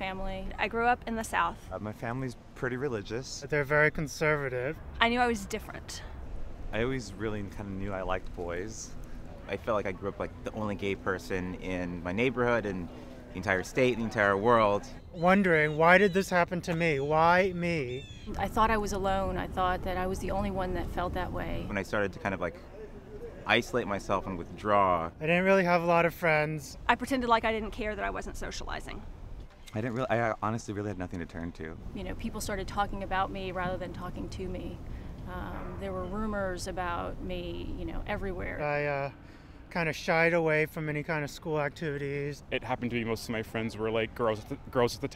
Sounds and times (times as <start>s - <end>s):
Male speech, man speaking: 1.7s - 4.8s, 6.7s - 18.1s, 21.7s - 26.8s, 29.7s - 31.8s, 38.4s - 45.1s.